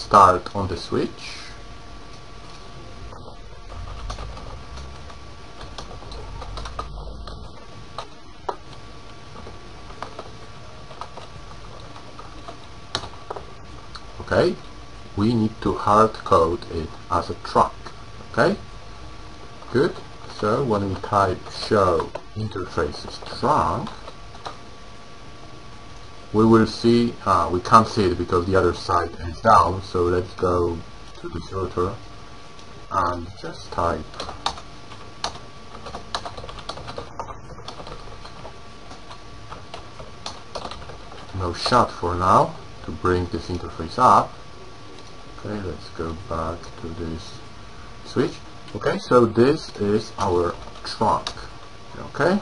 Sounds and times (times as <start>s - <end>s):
Speech: 0.0s - 1.6s, 14.2s - 14.6s, 15.2s - 18.6s, 19.7s - 24.0s, 26.3s - 32.0s, 32.9s - 34.3s, 41.3s - 44.4s, 45.4s - 47.4s, 48.0s - 52.4s
Inside, small room: 0.0s - 52.4s.